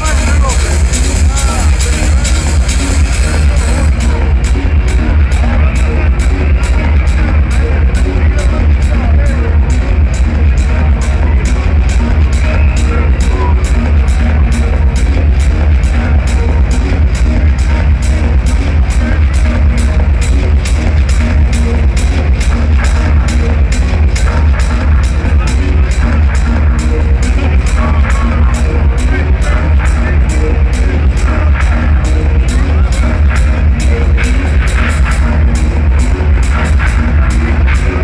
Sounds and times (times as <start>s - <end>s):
Speech: 0.0s - 16.3s, 24.0s - 38.0s
Techno: 0.0s - 38.0s.